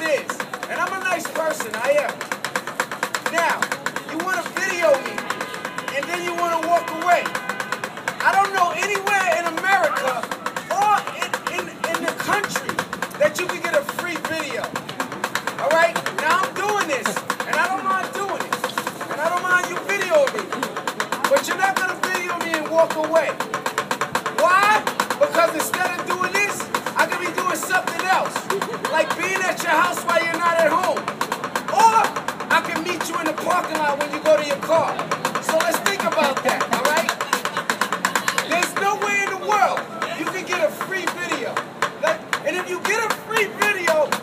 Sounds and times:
Speech: 0:00.0 - 0:02.2, 0:03.2 - 0:05.2, 0:05.9 - 0:07.3, 0:08.2 - 0:14.7, 0:15.6 - 0:20.5, 0:21.2 - 0:23.4, 0:24.4 - 0:31.0, 0:31.7 - 0:37.4, 0:38.3 - 0:44.2.

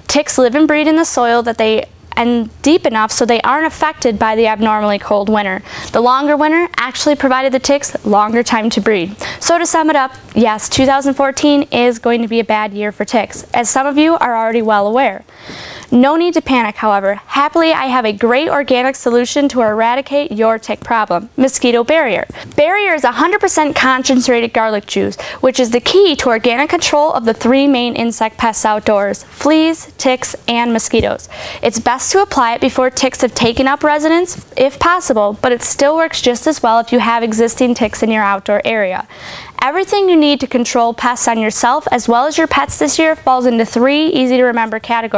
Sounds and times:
Speech: 0:00.1 - 0:15.2, 0:15.9 - 0:45.1.

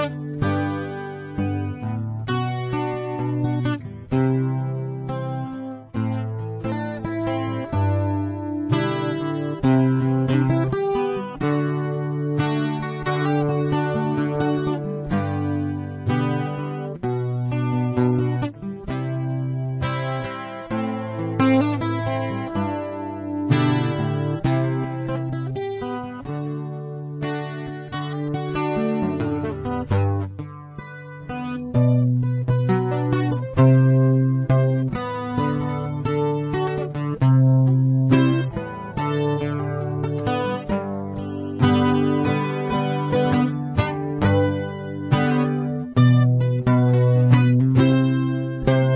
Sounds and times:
Acoustic guitar: 0:00.0 - 0:48.9
Strum: 0:00.0 - 0:48.9.

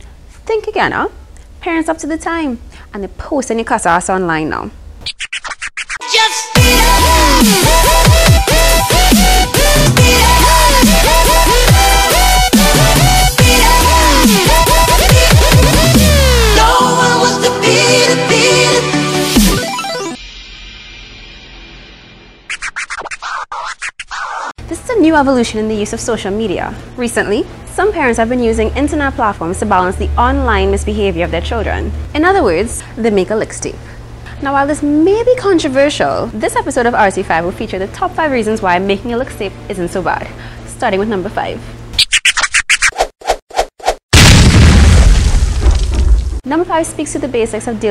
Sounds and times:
Music: 0:06.0 - 0:22.5.

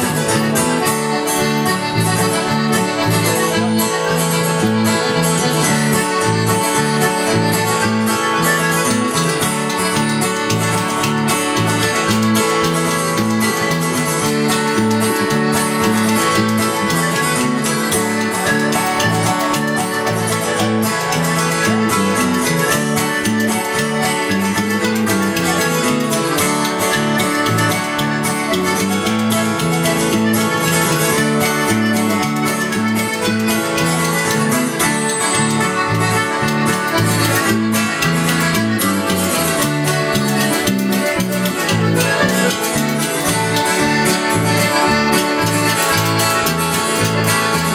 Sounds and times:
Music: 0:00.0 - 0:47.7.

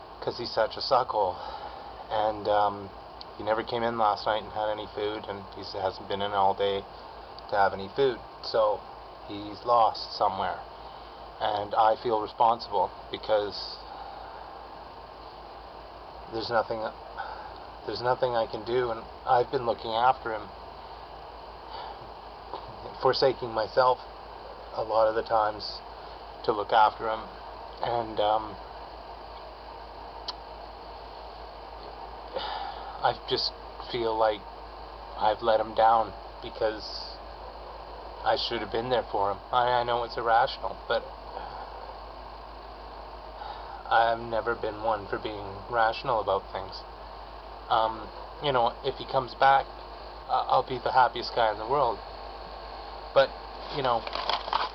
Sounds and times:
Speech: 0:00.2 - 0:01.4, 0:02.1 - 0:06.9, 0:07.5 - 0:10.7, 0:11.4 - 0:13.8, 0:16.3 - 0:17.0, 0:17.8 - 0:20.5, 0:22.8 - 0:24.0, 0:24.7 - 0:25.8, 0:26.4 - 0:28.6, 0:33.0 - 0:34.4, 0:35.2 - 0:37.2, 0:38.2 - 0:41.1, 0:43.8 - 0:46.9, 0:47.7 - 0:49.7, 0:50.3 - 0:52.0, 0:53.2 - 0:54.1.

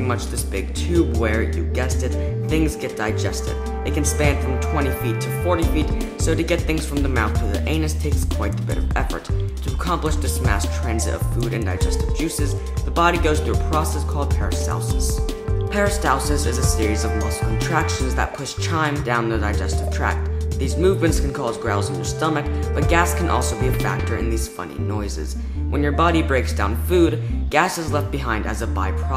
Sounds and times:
Music: 0:00.0 - 0:29.1
Speech: 0:00.0 - 0:29.1.

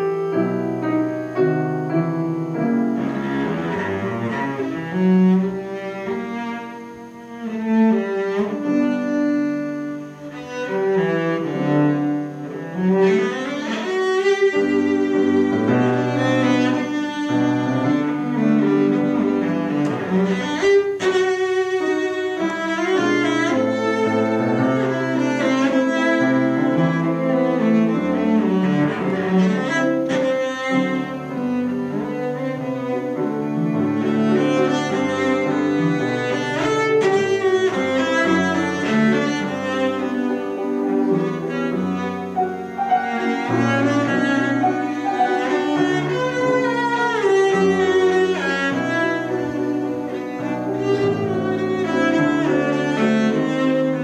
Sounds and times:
Cello: 0:00.0 - 0:54.0
Classical music: 0:00.0 - 0:54.0
Double bass: 0:00.0 - 0:54.0.

